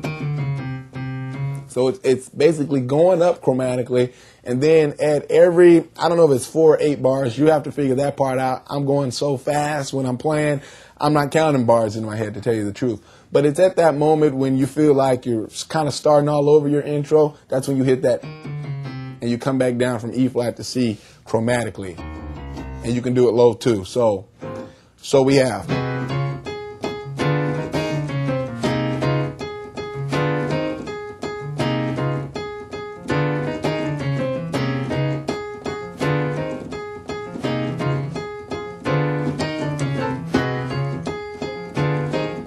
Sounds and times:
Speech: 0:01.7 - 0:18.2, 0:19.2 - 0:22.0, 0:22.8 - 0:24.3, 0:25.0 - 0:25.7.

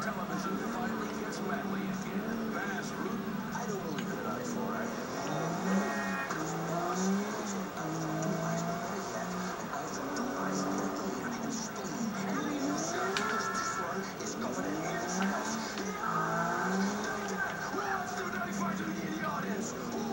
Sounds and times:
Car: 0:00.0 - 0:20.1
Speech: 0:00.0 - 0:20.1.

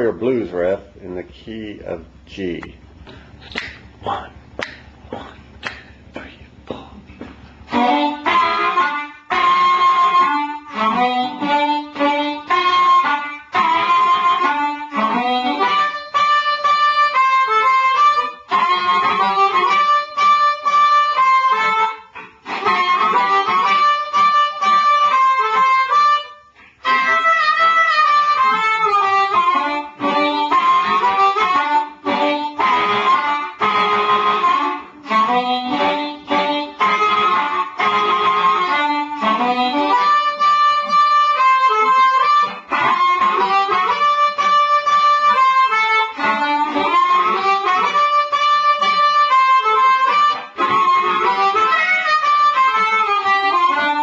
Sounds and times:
Harmonica: 0:03.1 - 0:54.0
Wind instrument, woodwind instrument: 0:07.6 - 0:54.0.

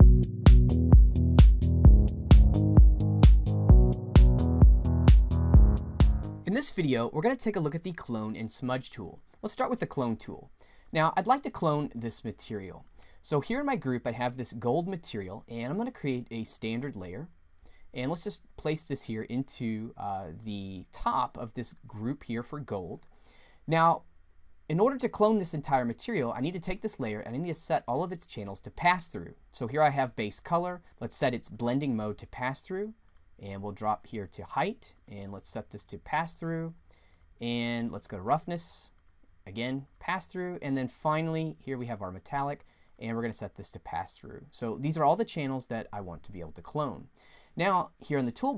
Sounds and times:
Speech: 0:06.5 - 0:17.3, 0:17.9 - 0:23.1, 0:23.7 - 0:24.0, 0:24.7 - 0:36.8, 0:37.4 - 0:48.5.

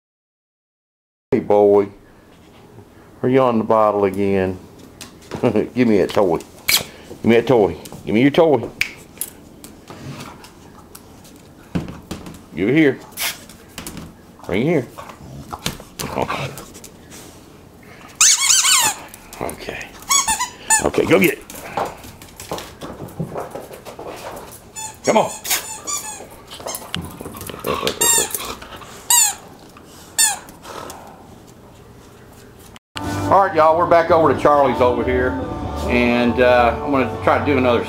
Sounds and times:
Speech: 0:01.4 - 0:02.0, 0:03.2 - 0:04.6, 0:05.4 - 0:06.5, 0:07.2 - 0:08.7, 0:12.6 - 0:13.0, 0:14.5 - 0:15.0, 0:19.4 - 0:20.0, 0:20.8 - 0:21.4, 0:25.1 - 0:25.4, 0:33.3 - 0:37.8
Music: 0:33.0 - 0:37.8.

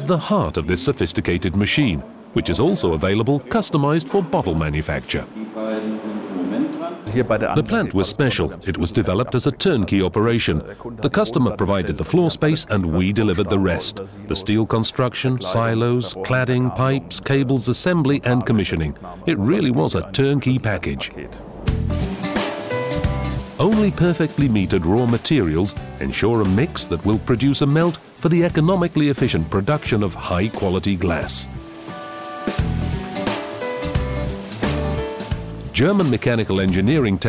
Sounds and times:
Speech: 0:00.0 - 0:21.4, 0:23.6 - 0:31.6, 0:35.7 - 0:37.2.

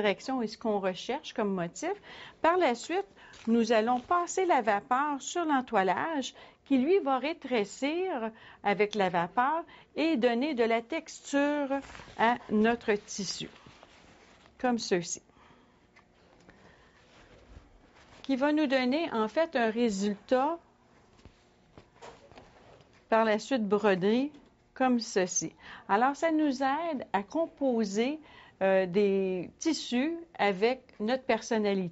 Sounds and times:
Speech: 0:00.0 - 0:13.6, 0:14.6 - 0:15.2, 0:18.2 - 0:20.6, 0:23.2 - 0:31.9.

